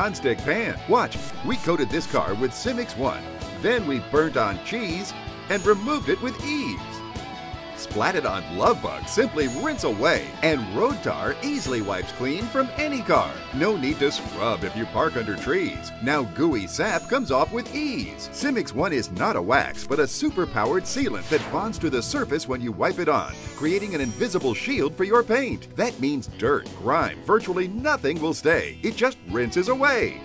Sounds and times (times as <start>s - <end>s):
Speech: 0.0s - 7.0s, 7.8s - 30.2s
Music: 0.0s - 30.2s.